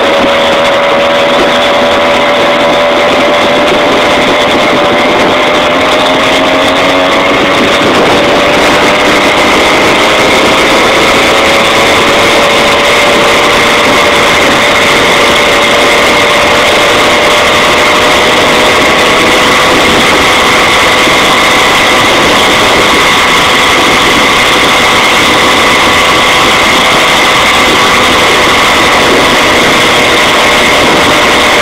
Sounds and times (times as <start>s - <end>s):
Medium engine (mid frequency): 0.0s - 31.6s
Vehicle: 0.0s - 31.6s.